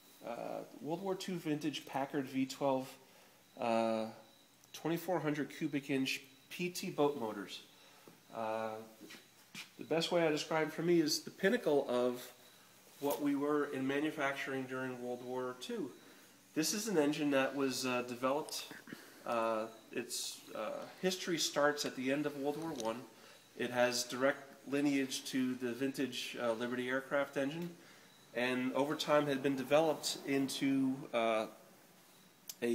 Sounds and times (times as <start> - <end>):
Speech: 0.2 - 3.0, 3.6 - 4.2, 4.8 - 7.7, 8.3 - 9.0, 9.8 - 12.4, 13.0 - 16.0, 16.6 - 31.6, 32.5 - 32.7.